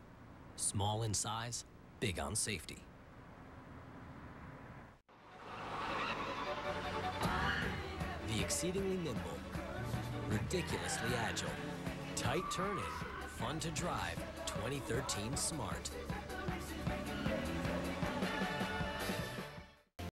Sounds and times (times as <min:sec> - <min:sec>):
Speech: 0:00.6 - 0:02.9, 0:08.2 - 0:09.4, 0:10.3 - 0:11.6, 0:12.2 - 0:15.9
Skidding: 0:03.0 - 0:19.4
Music: 0:06.1 - 0:20.0.